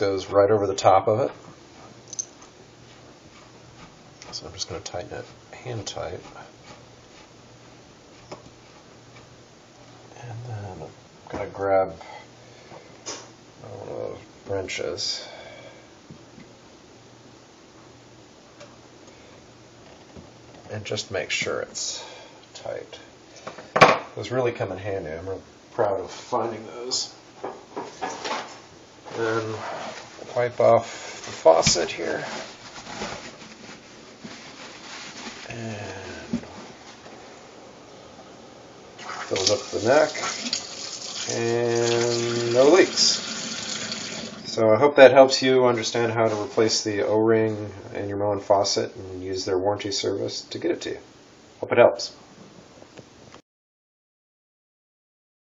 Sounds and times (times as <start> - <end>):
Speech: 0.0 - 1.4, 4.2 - 6.6, 10.2 - 12.1, 13.6 - 15.4, 20.7 - 23.1, 24.2 - 27.2, 29.1 - 32.5, 35.5 - 36.4, 39.3 - 40.3, 41.3 - 43.2, 44.5 - 52.2
Inside, small room: 0.0 - 53.4
Water tap, faucet: 39.0 - 44.5.